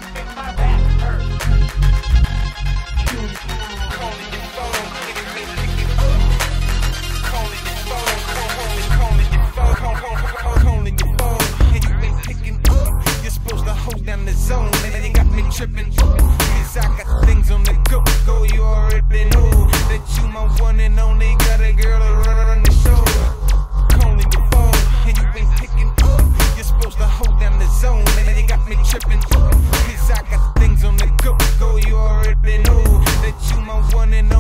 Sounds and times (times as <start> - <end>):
Dubstep: 0.0 - 34.4.